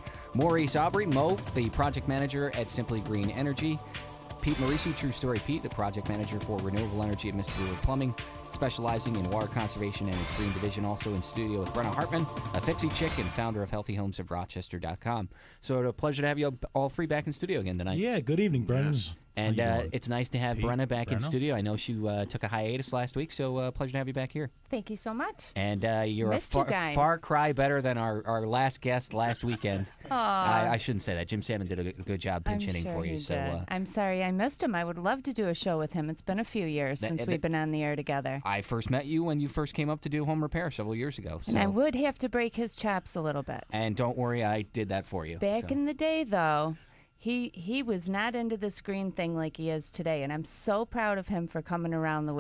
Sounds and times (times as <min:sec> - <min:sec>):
Speech: 0:00.4 - 0:03.8, 0:04.4 - 0:46.7.